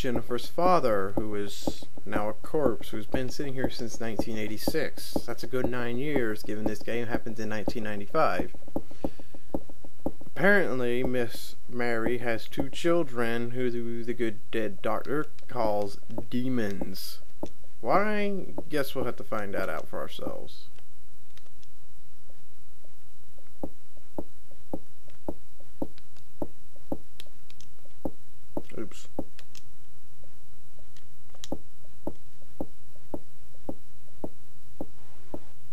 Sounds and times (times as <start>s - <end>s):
Speech: 0.0s - 8.5s, 10.4s - 17.2s, 17.8s - 20.7s, 28.7s - 29.2s.